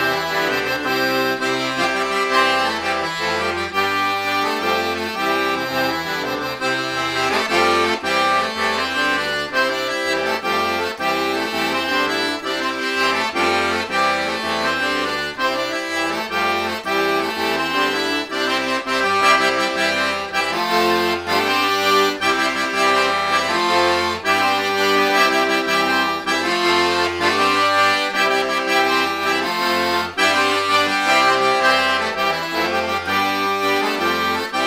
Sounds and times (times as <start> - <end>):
Accordion: 0.0 - 34.6.